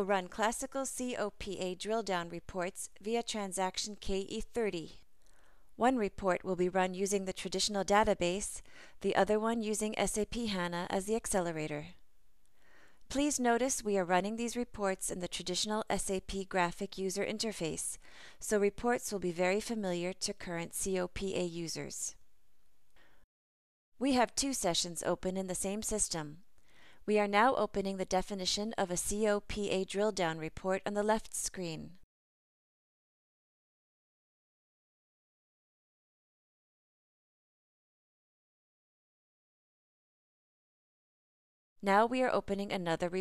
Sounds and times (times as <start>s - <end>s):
Speech: 0.0s - 5.0s, 5.8s - 12.0s, 13.1s - 22.2s, 24.0s - 26.4s, 27.1s - 32.0s, 41.8s - 43.2s.